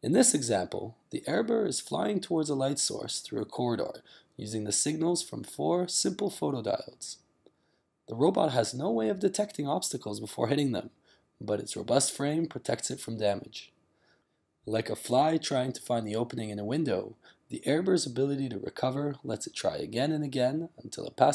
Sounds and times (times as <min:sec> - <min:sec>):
Speech: 0:00.0 - 0:07.2, 0:08.1 - 0:13.7, 0:14.7 - 0:21.3.